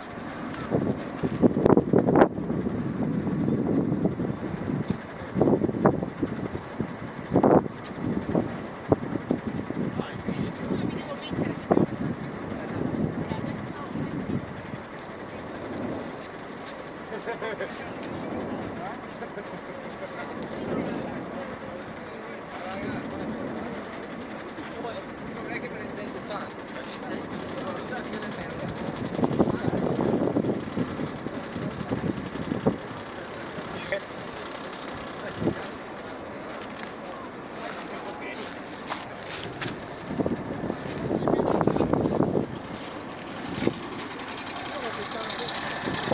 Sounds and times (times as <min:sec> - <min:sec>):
Speech: 0:09.9 - 0:15.8, 0:17.1 - 0:30.2, 0:35.0 - 0:39.5, 0:44.4 - 0:46.1.